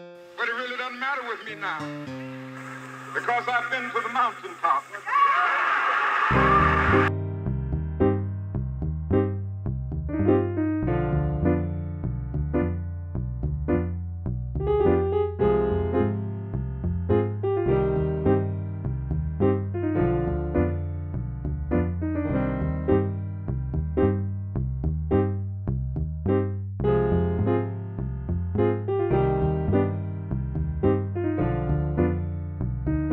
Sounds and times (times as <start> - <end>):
Music: 0.0 - 4.1, 6.3 - 33.1.